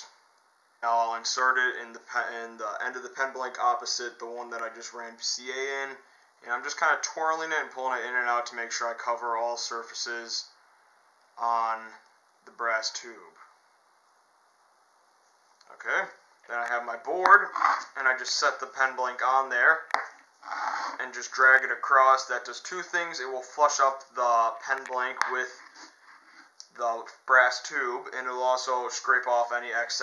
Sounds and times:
Inside, small room: 0.0s - 30.0s
Speech: 0.8s - 10.6s, 11.4s - 13.5s, 15.6s - 19.9s, 20.9s - 25.6s, 26.6s - 30.0s.

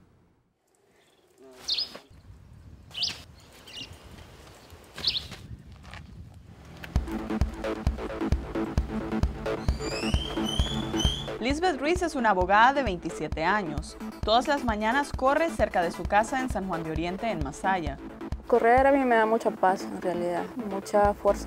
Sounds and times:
Outside, rural or natural: 0.0s - 21.4s
Speech: 1.4s - 1.7s, 11.4s - 21.4s
Music: 6.8s - 21.4s.

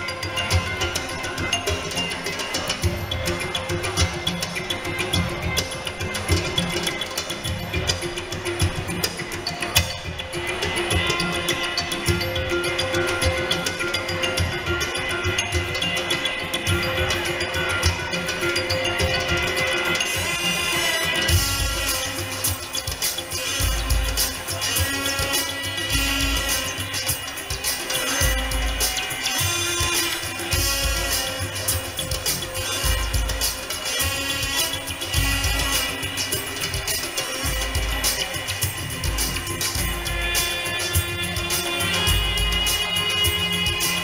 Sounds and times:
Inside, large room or hall: 0.0s - 44.0s
Music: 0.0s - 44.0s.

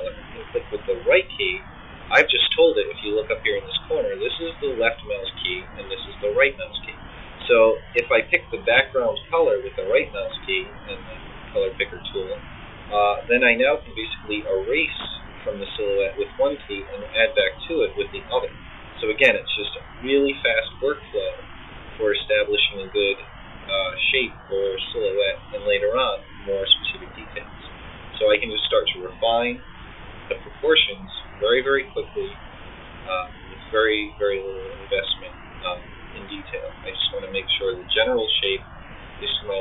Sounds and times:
Speech: 0.0s - 21.4s, 22.0s - 29.6s, 30.3s - 32.4s, 33.1s - 39.6s
Inside, small room: 0.0s - 39.6s.

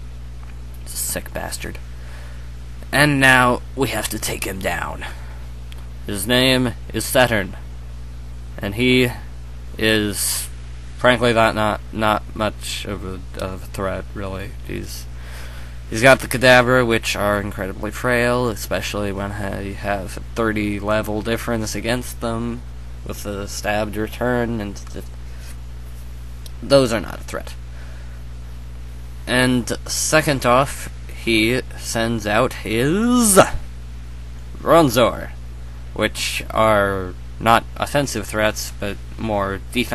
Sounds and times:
Speech: 0.8s - 1.8s, 2.8s - 5.3s, 6.0s - 7.7s, 8.6s - 15.1s, 15.9s - 25.1s, 26.5s - 27.6s, 29.2s - 33.7s, 34.5s - 35.4s, 36.0s - 39.9s.

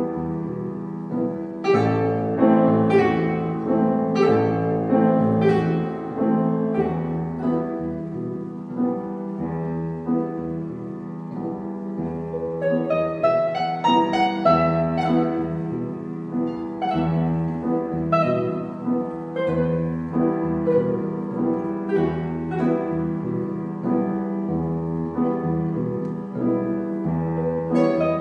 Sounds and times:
Guitar: 0.0s - 28.2s
Piano: 0.0s - 28.2s.

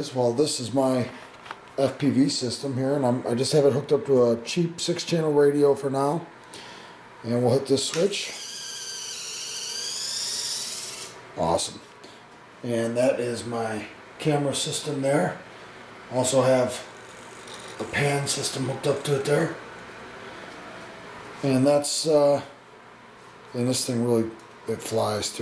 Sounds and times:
Speech: 0.0s - 1.2s, 1.8s - 6.3s, 7.2s - 8.4s, 11.4s - 11.9s, 12.6s - 15.4s, 16.1s - 16.9s, 17.8s - 19.6s, 21.4s - 22.6s, 23.5s - 25.4s
Inside, small room: 0.0s - 25.4s.

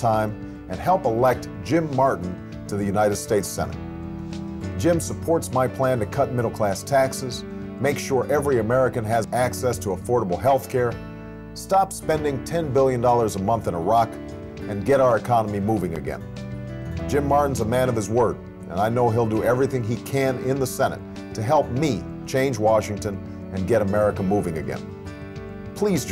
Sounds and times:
Speech: 0.0s - 3.8s, 4.8s - 11.0s, 11.6s - 16.2s, 17.1s - 24.8s, 25.8s - 26.1s
Music: 0.0s - 26.1s.

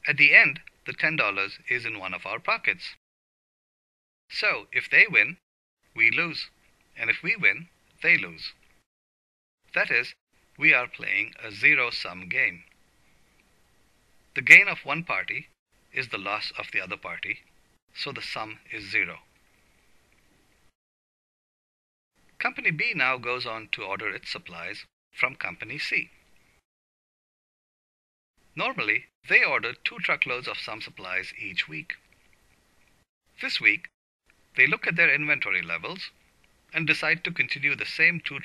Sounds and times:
Speech: 0.0s - 3.0s, 4.3s - 5.4s, 6.0s - 8.6s, 9.7s - 12.7s, 14.4s - 19.3s, 22.4s - 26.2s, 28.6s - 32.0s, 33.4s - 33.9s, 34.6s - 38.4s.

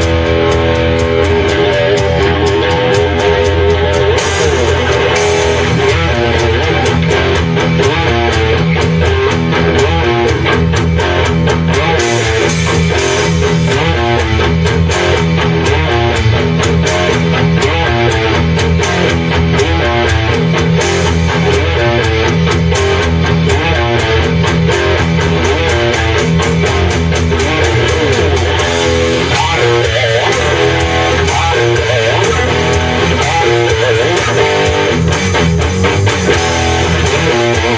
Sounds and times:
Blues: 0.0s - 37.7s.

